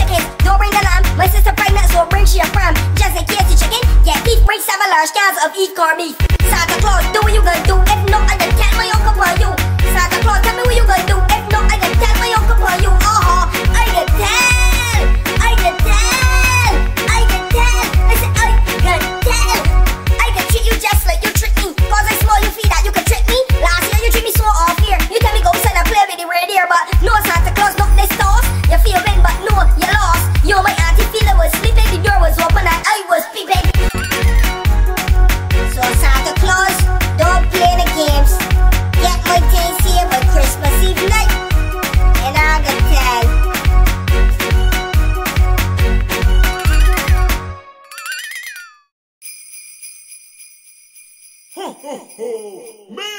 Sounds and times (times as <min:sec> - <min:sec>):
Music: 0:00.0 - 0:47.8.